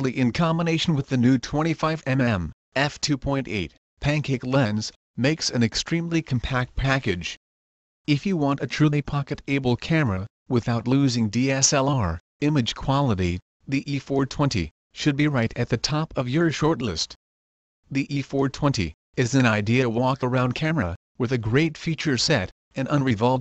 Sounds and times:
Speech: 0:00.0 - 0:07.4, 0:08.1 - 0:17.2, 0:17.9 - 0:23.4.

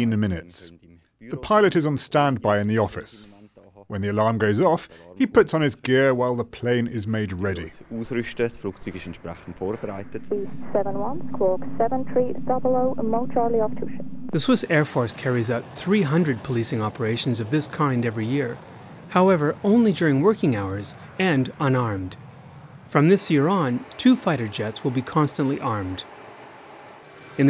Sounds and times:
Speech: 0:00.0 - 0:22.2, 0:22.9 - 0:26.0
Vehicle: 0:14.4 - 0:27.4.

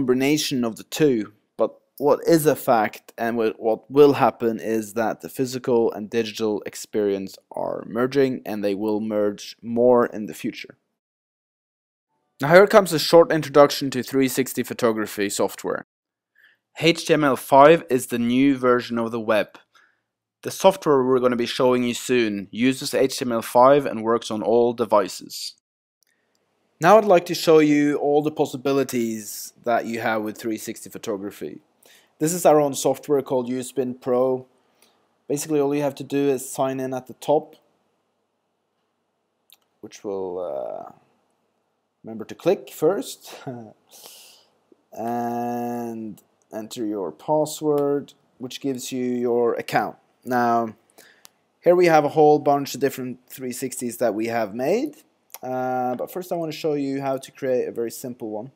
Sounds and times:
Speech: 0:00.0 - 0:10.8, 0:12.4 - 0:15.9, 0:16.8 - 0:19.6, 0:20.4 - 0:25.6, 0:26.8 - 0:31.6, 0:32.2 - 0:34.5, 0:35.3 - 0:37.6, 0:39.8 - 0:41.0, 0:42.1 - 0:43.8, 0:45.0 - 0:50.8, 0:51.6 - 0:58.5.

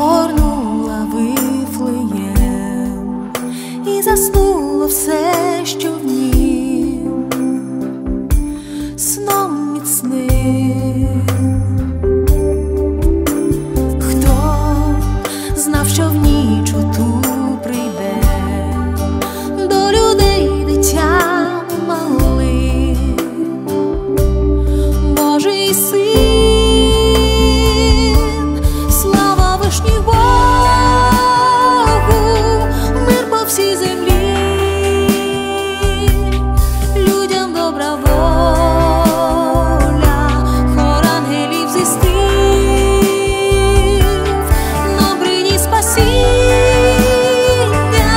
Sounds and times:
Christmas music: 0:00.0 - 0:48.1.

